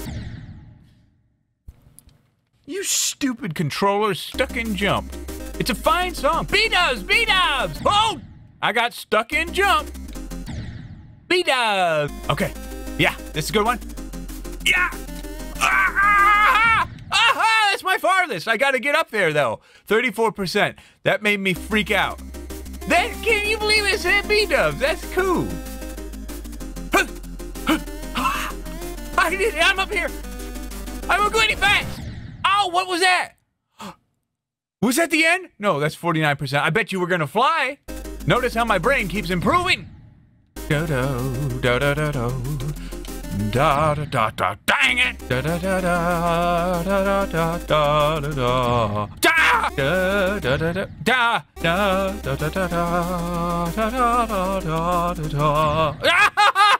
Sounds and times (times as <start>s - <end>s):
Speech: 2.7s - 5.0s, 5.6s - 9.9s, 11.3s - 13.8s, 17.1s - 22.2s, 22.9s - 25.6s, 29.2s - 30.1s, 31.1s - 33.4s, 34.8s - 39.8s, 43.4s - 45.2s, 47.6s - 49.8s, 50.5s - 52.5s
Music: 4.3s - 8.2s, 9.3s - 10.6s, 11.9s - 16.8s, 21.4s - 32.0s, 37.8s - 39.8s, 40.6s - 50.9s, 51.5s - 56.2s.